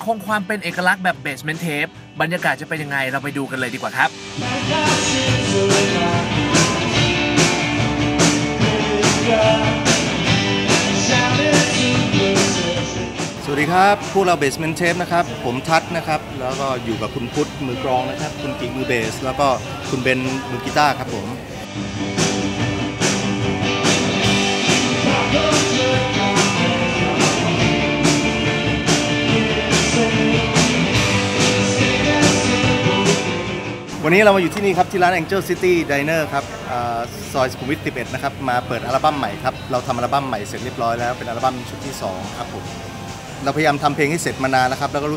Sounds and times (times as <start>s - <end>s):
Speech: 0.0s - 4.1s, 13.4s - 21.6s, 34.0s - 42.6s, 43.4s - 45.1s
Music: 0.0s - 45.1s.